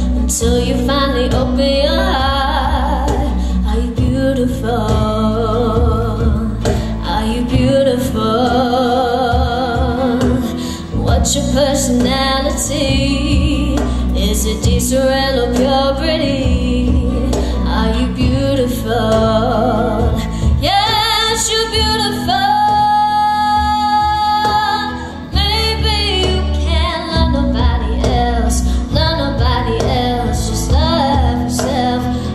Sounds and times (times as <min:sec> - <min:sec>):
Female singing: 0:00.0 - 0:32.3
Music: 0:00.0 - 0:32.3.